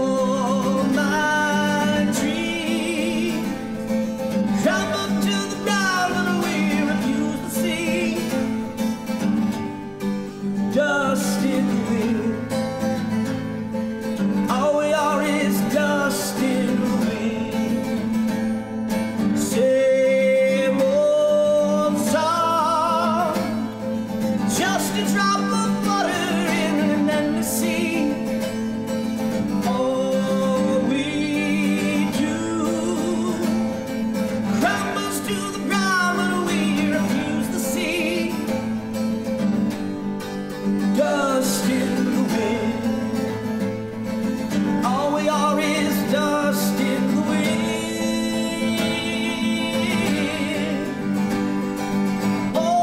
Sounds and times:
Music: 0.0 - 52.8.

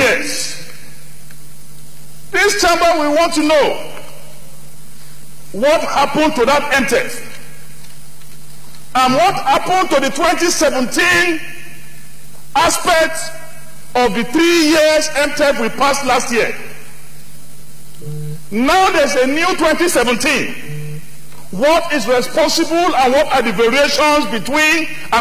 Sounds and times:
Narration, monologue: 0.0 - 25.2.

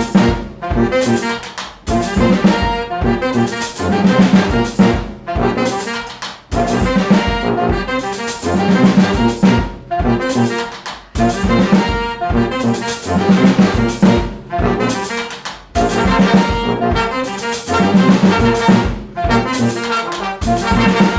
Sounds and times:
Drum: 0.0 - 21.1
Jazz: 0.0 - 21.1.

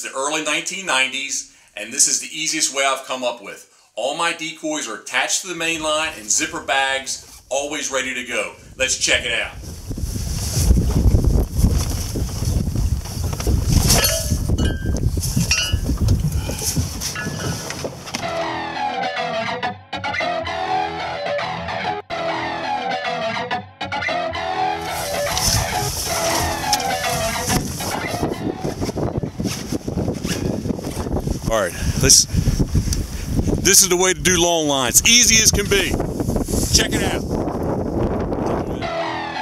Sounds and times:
Speech: 0.0 - 9.6, 31.5 - 32.3, 33.6 - 36.0, 36.7 - 37.2
Music: 18.2 - 28.8, 38.8 - 39.4.

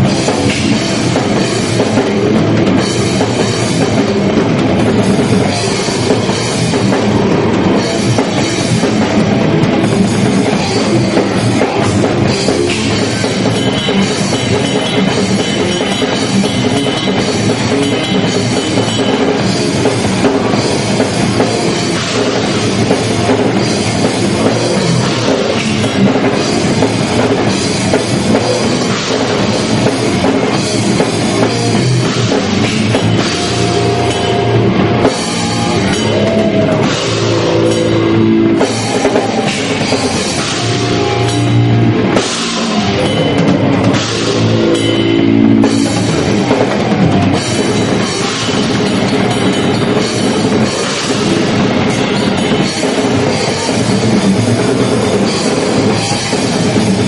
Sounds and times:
Drum: 0.0 - 57.0
Drum kit: 0.0 - 57.0
Heavy metal: 0.0 - 57.0.

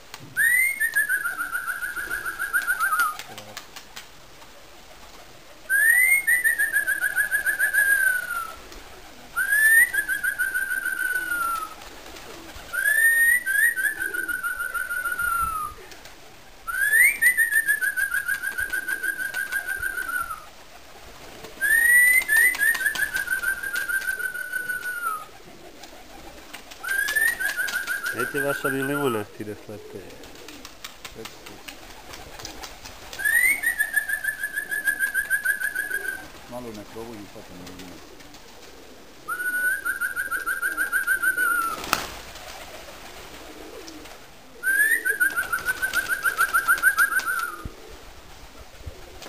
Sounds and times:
Pigeon, dove: 0.4 - 36.5, 37.6 - 48.0
Speech: 3.3 - 3.6, 28.1 - 30.2, 31.2 - 31.7, 36.5 - 38.0.

